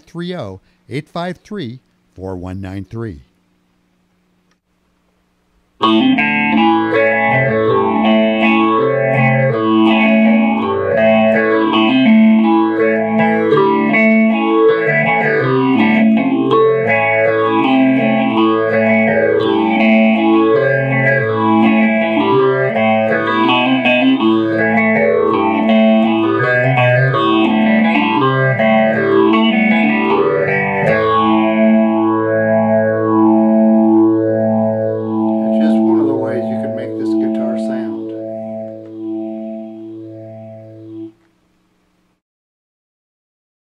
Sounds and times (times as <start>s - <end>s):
Guitar: 5.8s - 41.4s.